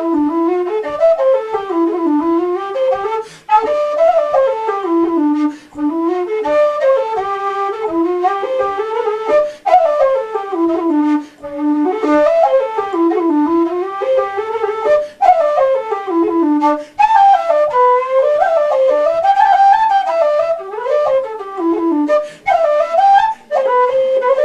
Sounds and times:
Flute: 0:00.0 - 0:24.4.

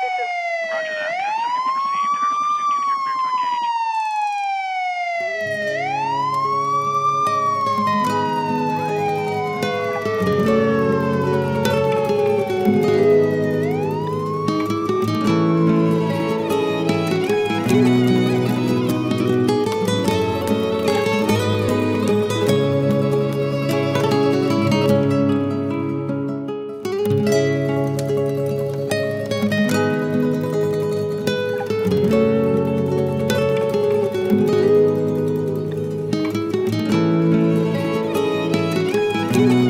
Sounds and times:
Soundtrack music: 0:05.4 - 0:25.6.

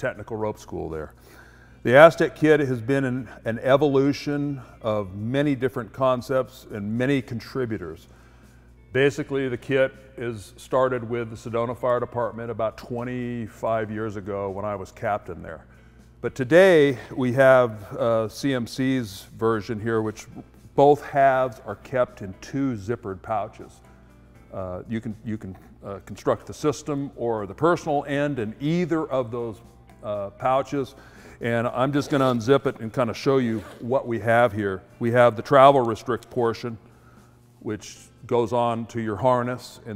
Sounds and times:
Speech: 0:00.0 - 0:01.2, 0:01.8 - 0:08.1, 0:08.9 - 0:23.8, 0:24.5 - 0:36.8, 0:37.6 - 0:39.9.

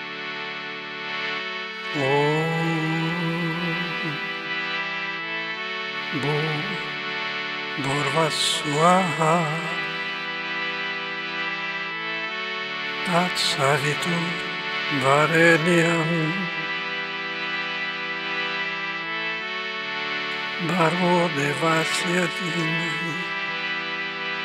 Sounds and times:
Mantra: 0:01.9 - 0:04.3, 0:06.1 - 0:06.9, 0:07.8 - 0:10.1, 0:13.0 - 0:16.7, 0:20.6 - 0:23.3.

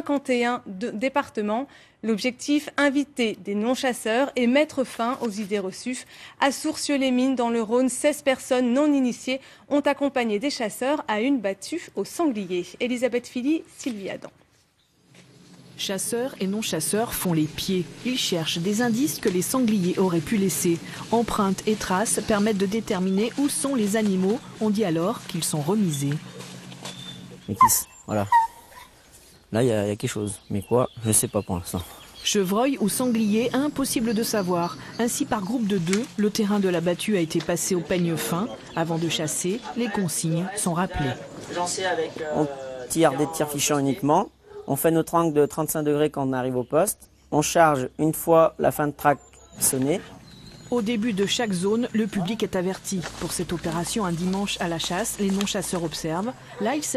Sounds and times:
Speech: 0:27.5 - 0:28.4, 0:29.6 - 0:50.1, 0:50.7 - 0:56.9.

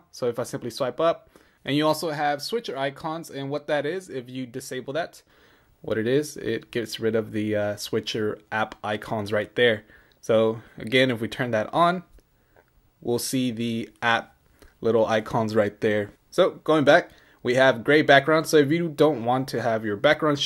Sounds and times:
Speech: 0:00.0 - 0:12.2, 0:13.0 - 0:20.4
Inside, small room: 0:00.0 - 0:20.4.

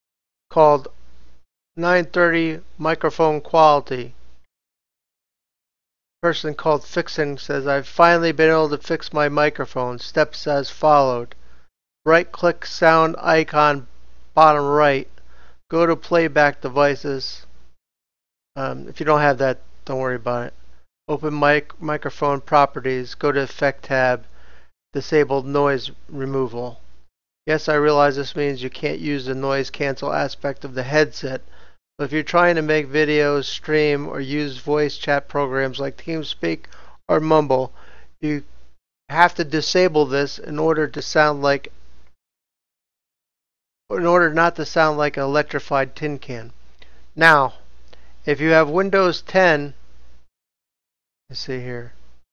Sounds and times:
Speech: 0:00.5 - 0:01.0, 0:01.8 - 0:04.2, 0:06.2 - 0:11.4, 0:12.1 - 0:15.1, 0:15.7 - 0:17.5, 0:18.6 - 0:24.3, 0:25.0 - 0:26.8, 0:27.5 - 0:31.4, 0:32.0 - 0:38.5, 0:39.1 - 0:41.8, 0:43.9 - 0:46.6, 0:47.2 - 0:47.7, 0:48.3 - 0:49.8, 0:51.3 - 0:52.0.

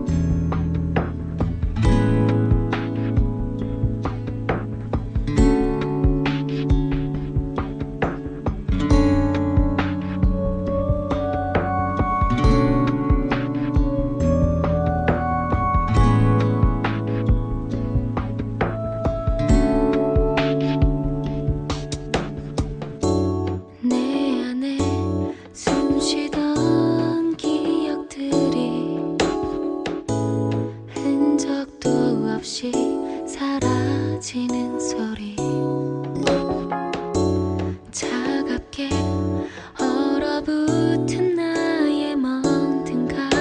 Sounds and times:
Music: 0:00.0 - 0:43.4.

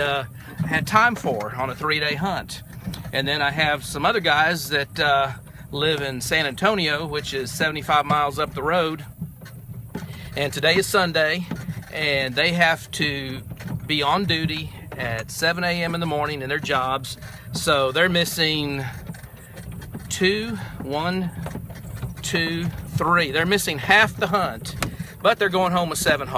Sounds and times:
Male speech, man speaking: 0:00.0 - 0:02.6, 0:03.2 - 0:09.1, 0:10.4 - 0:18.9, 0:20.1 - 0:21.3, 0:22.2 - 0:26.3.

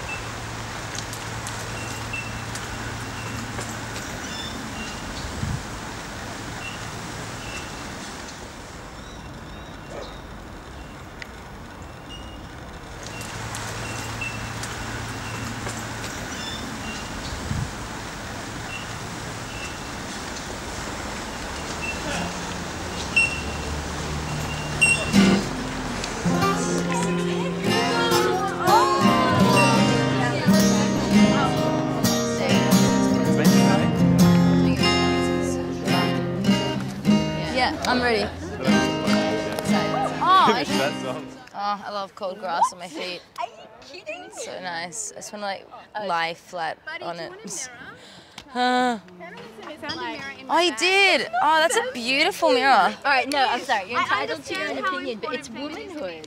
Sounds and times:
Outside, rural or natural: 0:00.0 - 0:56.2.

